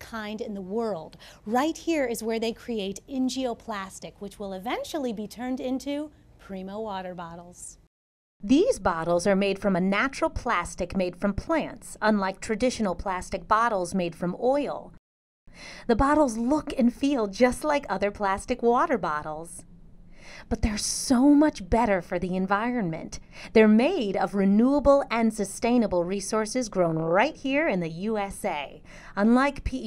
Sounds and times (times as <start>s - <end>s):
Speech: 0.0s - 15.0s, 15.9s - 19.6s, 20.5s - 29.8s.